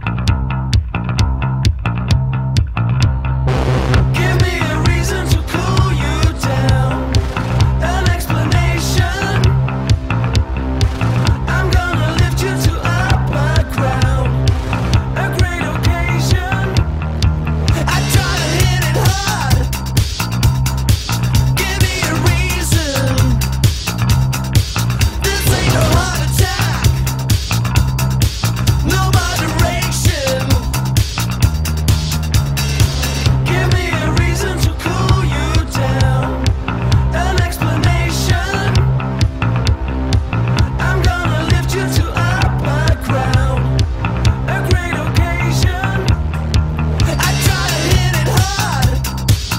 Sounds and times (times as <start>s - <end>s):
Music: 0.0s - 49.5s.